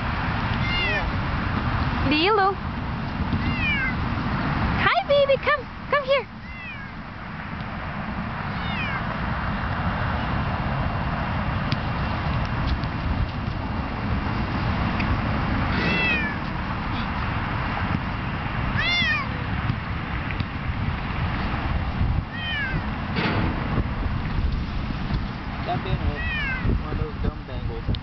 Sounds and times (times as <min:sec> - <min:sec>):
Meow: 0:00.6 - 0:01.1, 0:03.4 - 0:04.0, 0:06.4 - 0:07.0, 0:08.5 - 0:09.1, 0:15.7 - 0:16.4, 0:18.8 - 0:19.3, 0:22.3 - 0:22.8, 0:26.1 - 0:26.7.